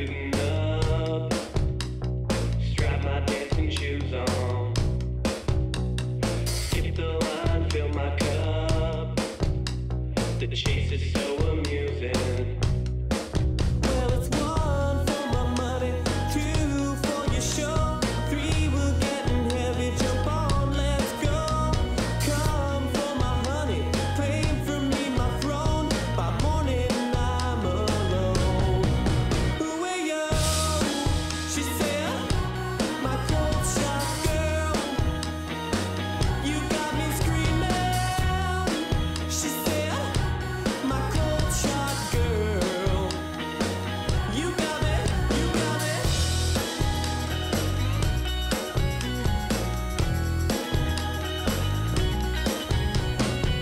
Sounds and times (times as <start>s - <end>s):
Funk: 0.0s - 29.7s, 30.3s - 53.6s
Pop music: 0.0s - 53.6s
Folk music: 13.6s - 53.6s.